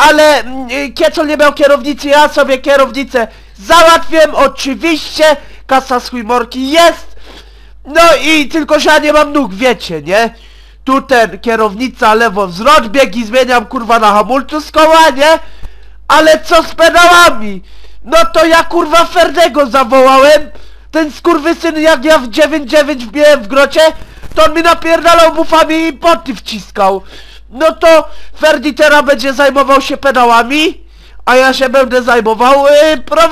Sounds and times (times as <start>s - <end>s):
Speech: 0.0s - 7.2s, 7.9s - 15.5s, 16.1s - 33.3s.